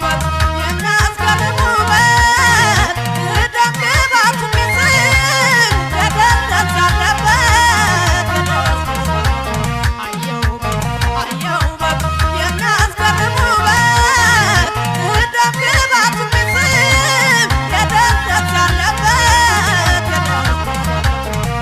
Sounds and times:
Folk music: 0.0s - 21.6s.

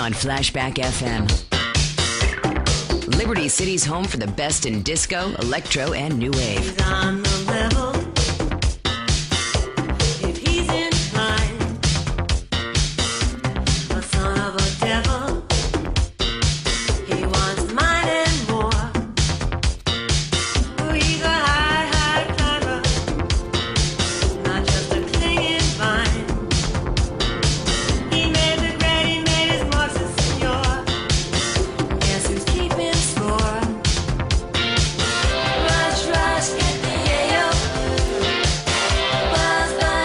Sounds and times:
Disco: 0.0s - 40.0s.

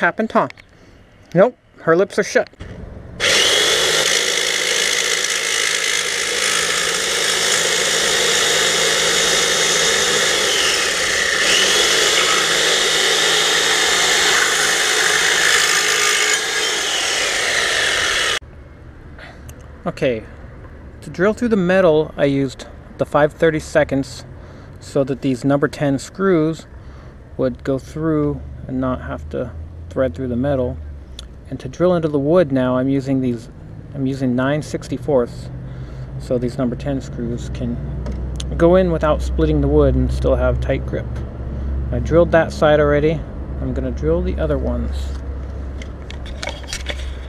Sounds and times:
Speech: 0.0s - 0.6s, 1.4s - 2.6s, 19.8s - 20.3s, 21.0s - 26.7s, 27.4s - 30.8s, 31.5s - 35.5s, 36.2s - 37.8s, 38.4s - 41.1s, 41.9s - 45.2s.

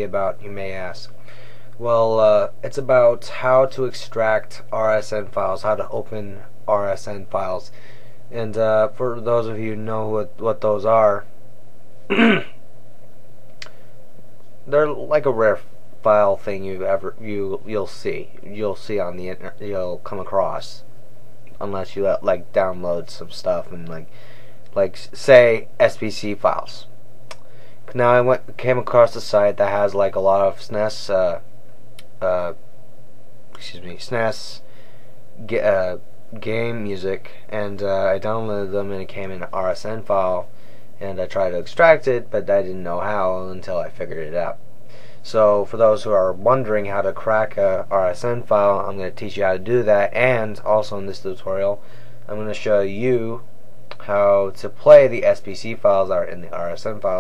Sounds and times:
Speech: 0.0s - 1.2s, 1.8s - 11.3s, 14.7s - 20.9s, 21.6s - 26.9s, 27.9s - 32.6s, 33.6s - 34.7s, 35.4s - 44.6s, 45.2s - 57.2s.

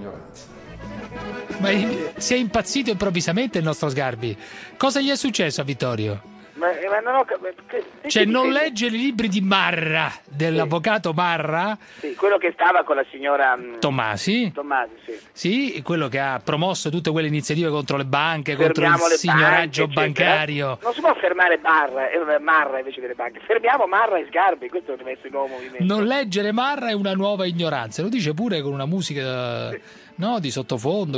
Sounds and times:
Speech: 1.6s - 31.1s.

